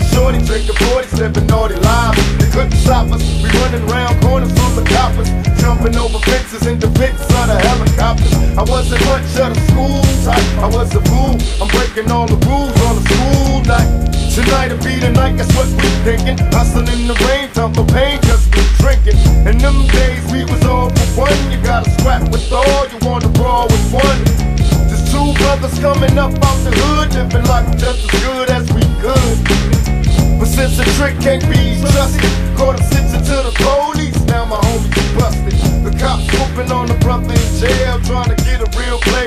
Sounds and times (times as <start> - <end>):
Music: 0.0 - 39.2.